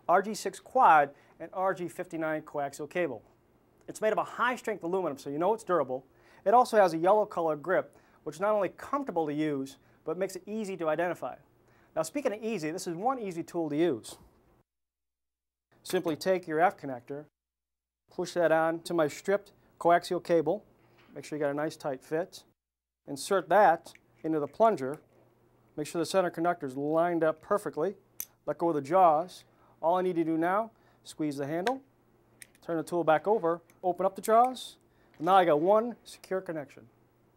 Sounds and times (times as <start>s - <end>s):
Speech: 0.1s - 3.2s, 3.9s - 11.4s, 12.0s - 14.2s, 15.8s - 17.3s, 18.1s - 22.5s, 23.1s - 25.0s, 25.8s - 31.8s, 32.6s - 36.9s.